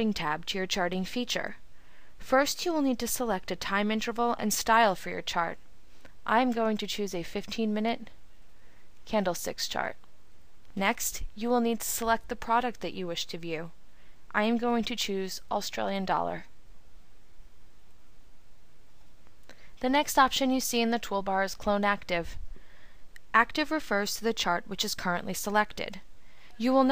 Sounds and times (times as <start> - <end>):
Speech: 0.0 - 1.6, 2.2 - 5.6, 6.3 - 8.1, 9.1 - 10.0, 10.8 - 13.7, 14.3 - 16.5, 19.8 - 22.4, 23.3 - 26.0, 26.6 - 26.9.